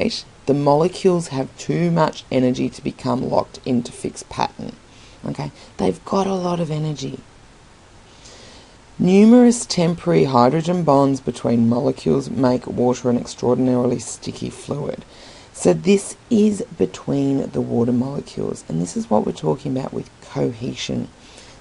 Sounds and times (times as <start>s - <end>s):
Speech: 0.0s - 7.2s, 9.0s - 15.0s, 15.6s - 21.1s.